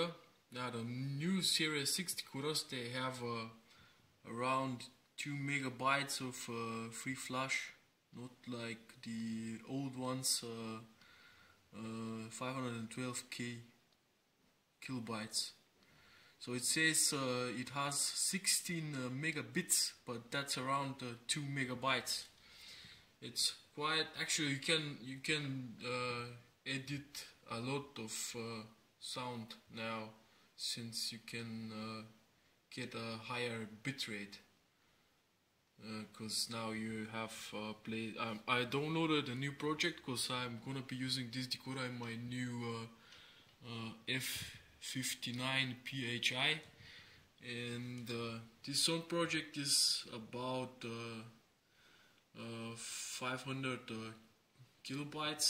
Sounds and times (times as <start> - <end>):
Speech: 0.0 - 3.6, 4.2 - 11.0, 11.7 - 13.8, 14.8 - 15.6, 16.4 - 22.4, 23.2 - 34.5, 35.8 - 43.0, 43.6 - 46.7, 47.4 - 51.4, 52.4 - 55.5.